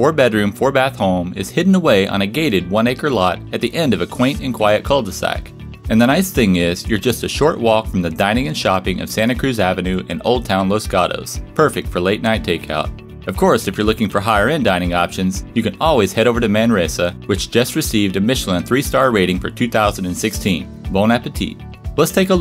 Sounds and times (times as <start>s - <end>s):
Music: 0.0s - 22.4s
Speech: 0.0s - 22.4s.